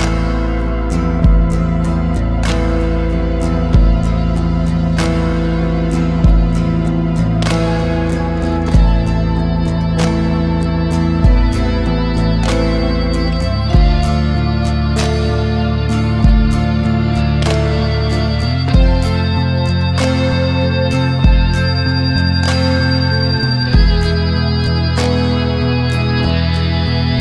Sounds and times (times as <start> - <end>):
Music: 0.0 - 27.2.